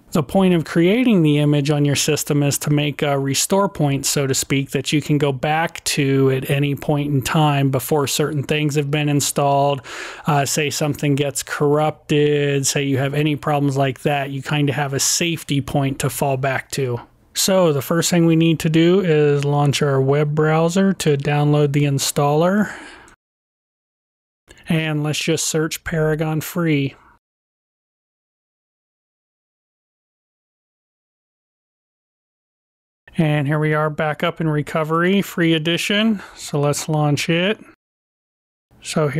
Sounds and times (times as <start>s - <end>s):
Speech: 0.1s - 22.9s, 24.5s - 27.0s, 33.1s - 37.8s, 38.8s - 39.1s.